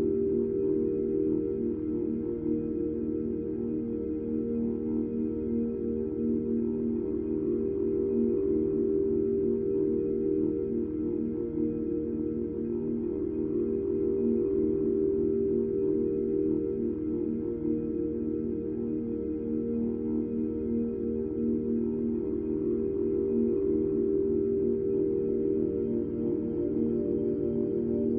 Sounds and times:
Music: 0.0s - 28.1s.

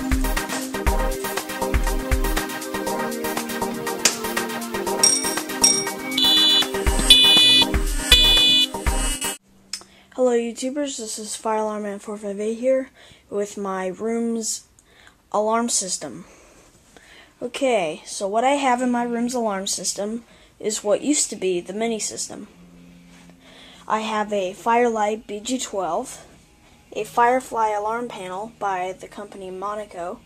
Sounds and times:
Speech: 10.2s - 14.7s, 15.3s - 16.3s, 17.4s - 22.5s, 23.9s - 26.3s, 26.9s - 30.2s.

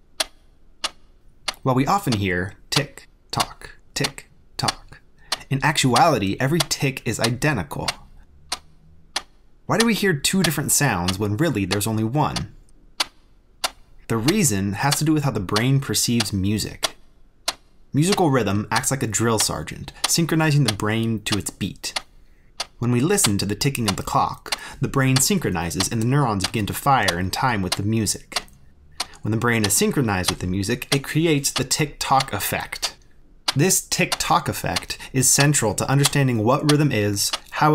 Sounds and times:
Speech: 1.6s - 8.1s, 9.7s - 12.6s, 14.1s - 17.0s, 18.0s - 22.0s, 22.8s - 28.5s, 29.1s - 37.7s.

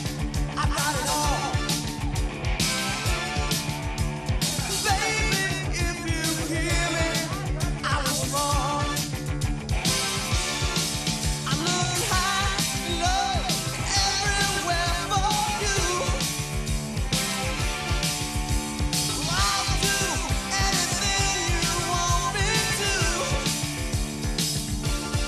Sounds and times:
Music: 0.0s - 25.2s.

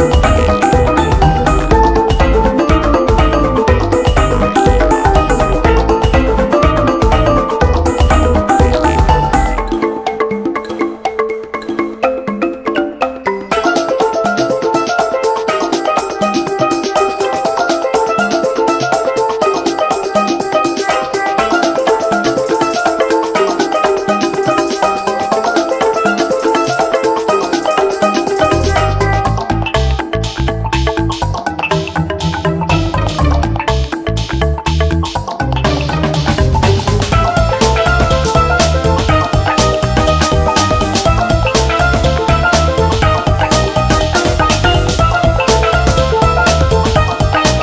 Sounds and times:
Music: 0.0s - 47.6s.

